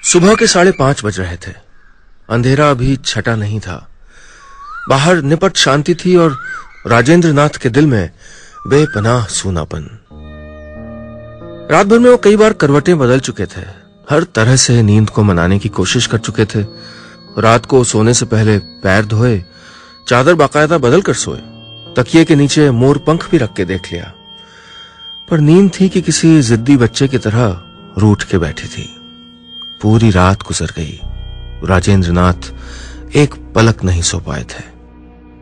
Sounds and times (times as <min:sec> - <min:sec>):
Speech: 0:00.0 - 0:01.6, 0:02.3 - 0:03.9, 0:04.9 - 0:08.1, 0:08.7 - 0:10.0, 0:11.7 - 0:16.7, 0:17.4 - 0:19.4, 0:20.1 - 0:21.4, 0:22.0 - 0:24.2, 0:25.3 - 0:29.0, 0:29.8 - 0:31.0, 0:31.6 - 0:32.5, 0:33.1 - 0:34.8
Music: 0:04.9 - 0:35.4.